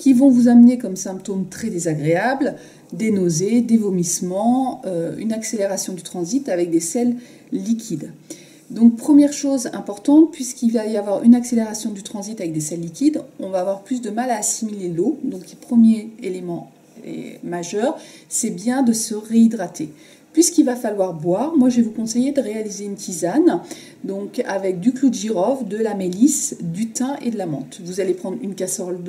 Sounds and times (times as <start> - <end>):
Speech: 0.0 - 29.0.